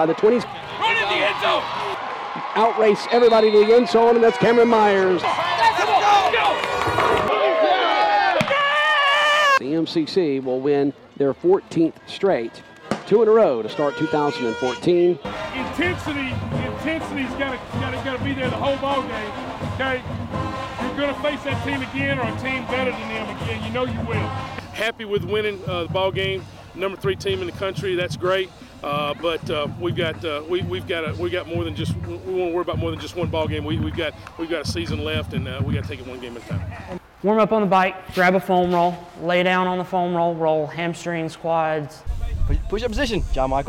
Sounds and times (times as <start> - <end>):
Speech: 9.6 - 20.0, 20.8 - 43.6.